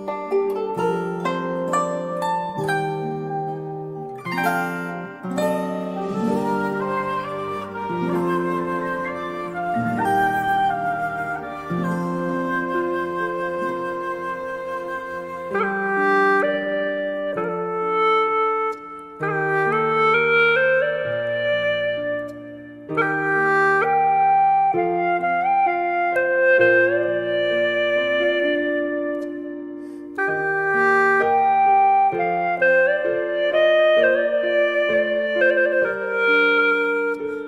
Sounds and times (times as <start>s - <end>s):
Flute: 0.0s - 37.4s.